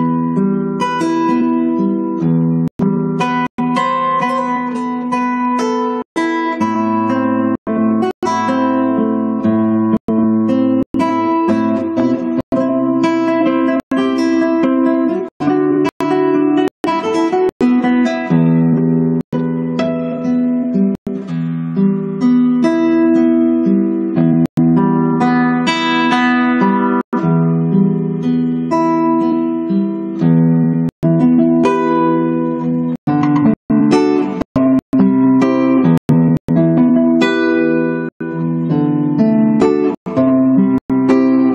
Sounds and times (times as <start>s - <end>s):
Strum: 0.0s - 41.5s.